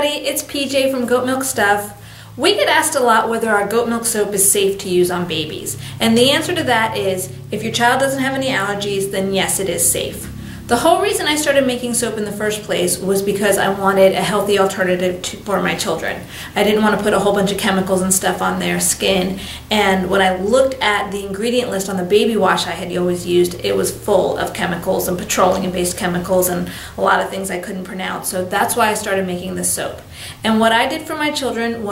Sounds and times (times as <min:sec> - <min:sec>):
Speech: 0:00.0 - 0:31.9.